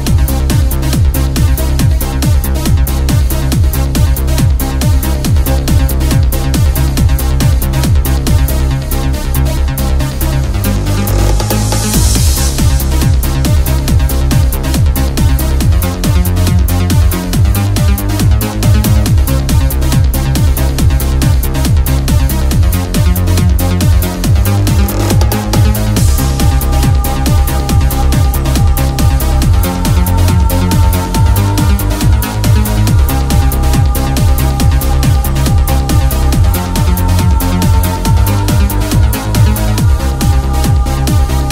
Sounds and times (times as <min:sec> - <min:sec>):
Electronic music: 0:00.0 - 0:41.5.